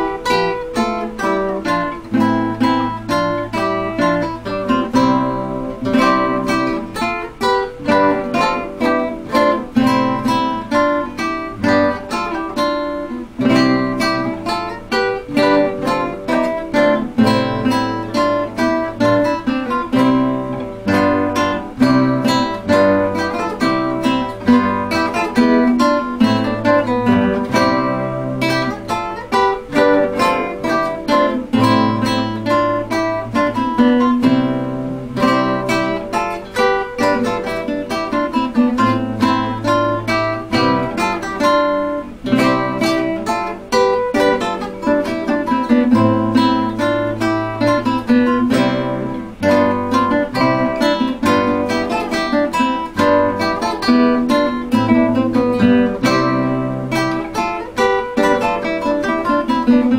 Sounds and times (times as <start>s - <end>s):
Strum: 0.0s - 59.9s.